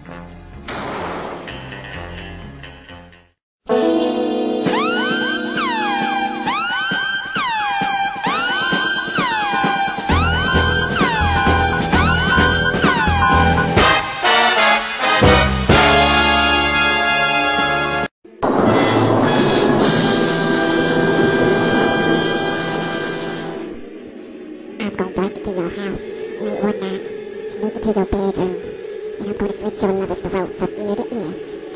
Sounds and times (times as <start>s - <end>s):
Music: 0.0s - 23.8s.